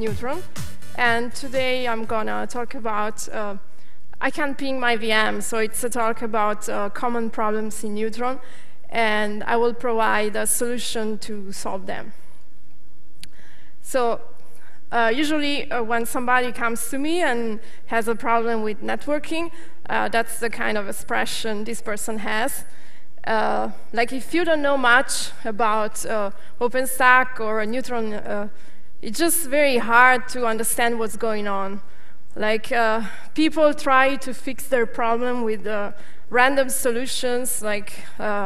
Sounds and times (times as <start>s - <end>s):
Speech: 0.0s - 3.6s, 4.2s - 12.1s, 13.9s - 14.2s, 14.9s - 22.6s, 23.3s - 31.8s, 32.4s - 38.4s.